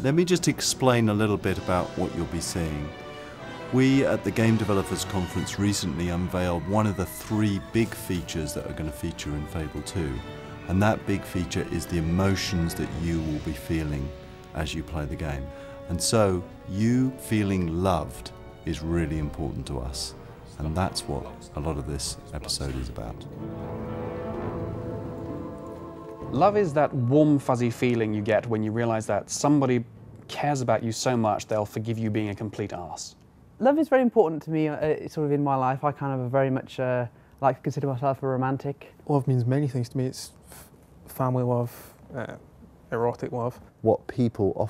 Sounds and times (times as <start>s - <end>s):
Speech: 0.0s - 2.9s, 3.7s - 23.3s, 26.3s - 40.4s, 41.1s - 44.7s
Music: 0.0s - 29.7s.